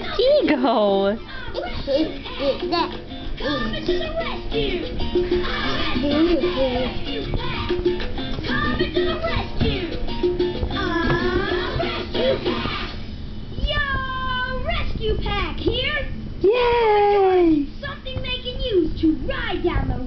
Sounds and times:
Music: 0.0 - 13.1
Child singing: 1.3 - 10.0, 10.6 - 13.0.

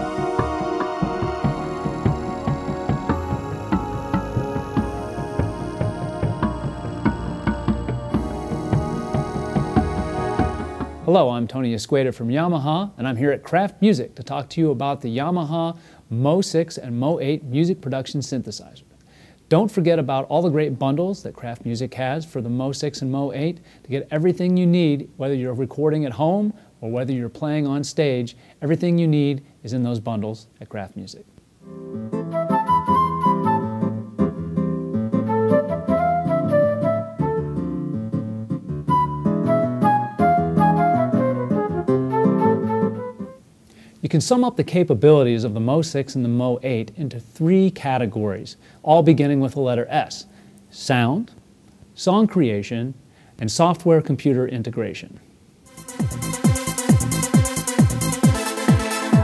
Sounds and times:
Speech: 11.1 - 18.8, 19.5 - 31.3, 44.0 - 51.4, 52.0 - 55.2.

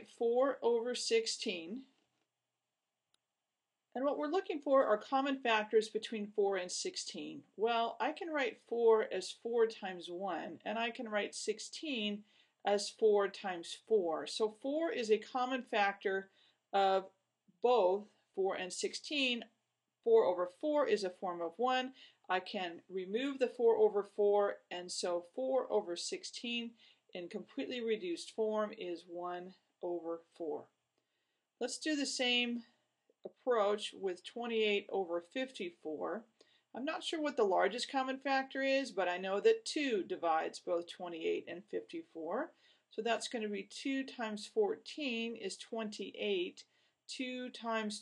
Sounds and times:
Speech: 0.0 - 1.9, 4.0 - 19.5, 20.1 - 30.7, 31.6 - 32.7, 33.3 - 48.0.

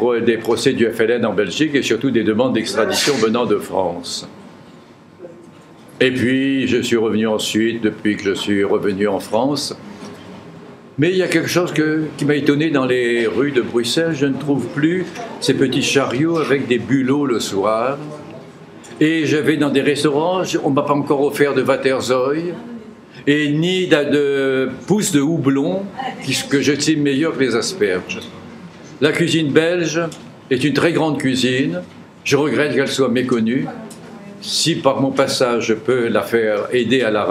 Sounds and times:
Speech: 0.0 - 4.4, 5.2 - 9.8, 11.0 - 37.3.

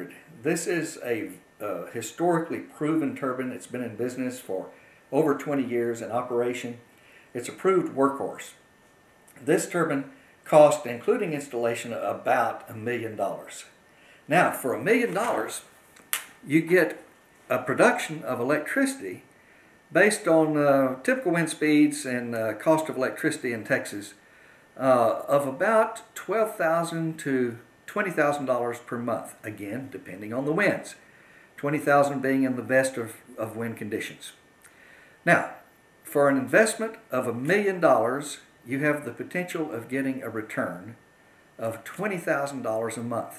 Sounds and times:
Speech: 0.0 - 8.6, 9.4 - 15.7, 16.4 - 19.3, 19.9 - 24.2, 24.8 - 31.0, 31.6 - 34.4, 35.2 - 41.0, 41.6 - 43.3.

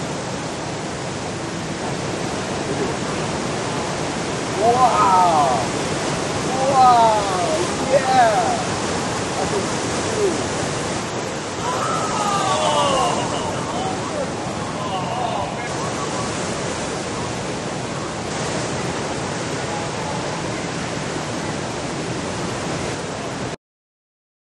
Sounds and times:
Ocean: 0.0 - 23.6
Speech: 4.6 - 5.8, 6.5 - 8.7, 11.6 - 15.7.

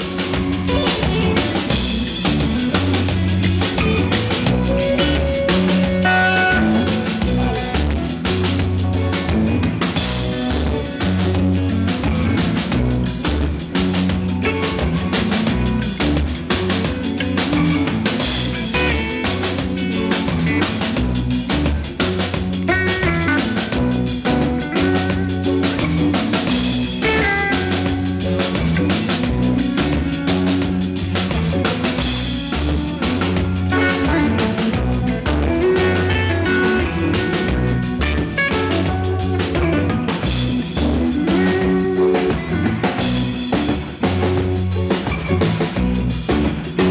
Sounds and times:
Music: 0.0 - 46.9.

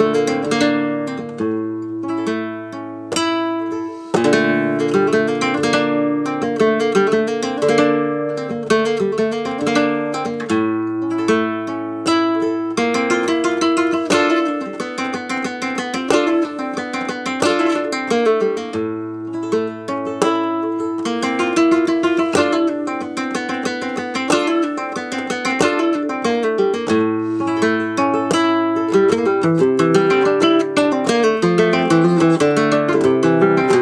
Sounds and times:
Acoustic guitar: 0.0 - 33.8.

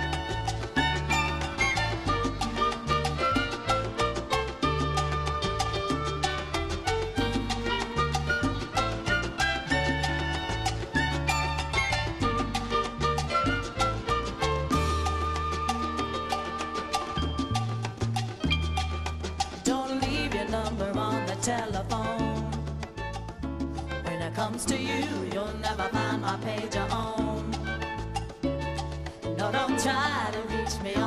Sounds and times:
Music: 0.0 - 31.0.

